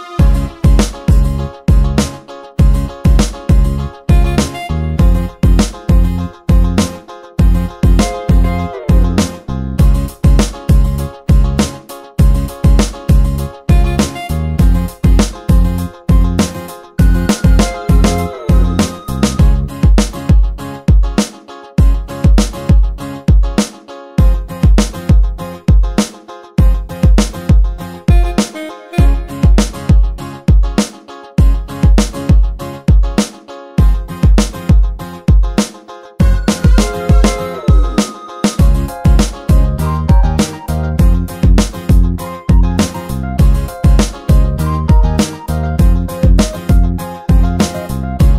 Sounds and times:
Music: 0.0 - 48.3.

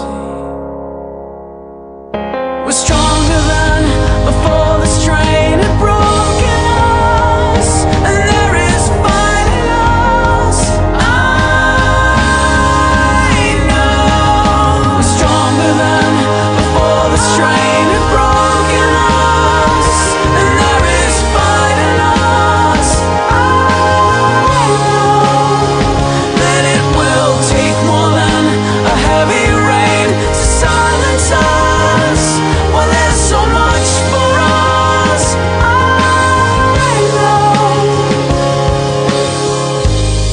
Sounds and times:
Music: 0.0 - 40.3.

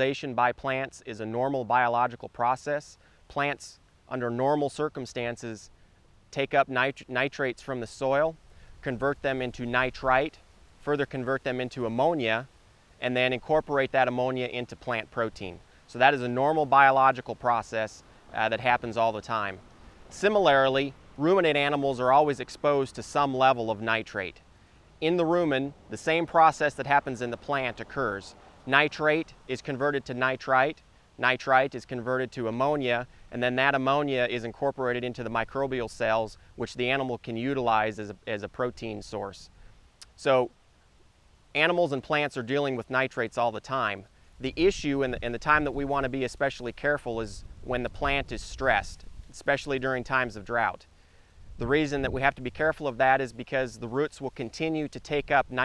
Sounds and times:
Speech: 0.0 - 5.7, 6.3 - 24.4, 25.0 - 40.6, 41.6 - 50.9, 51.6 - 55.6.

